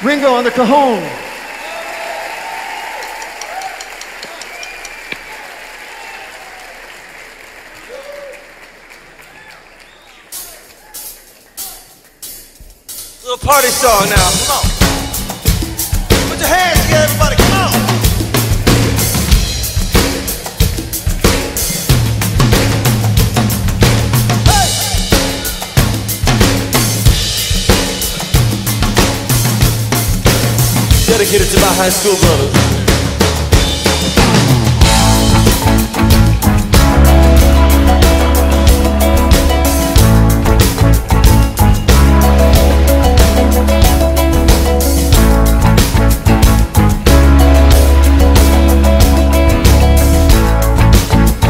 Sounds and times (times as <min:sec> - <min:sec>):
Drum kit: 0:09.8 - 0:51.5
Drum roll: 0:10.0 - 0:51.5
Bass drum: 0:13.8 - 0:51.5.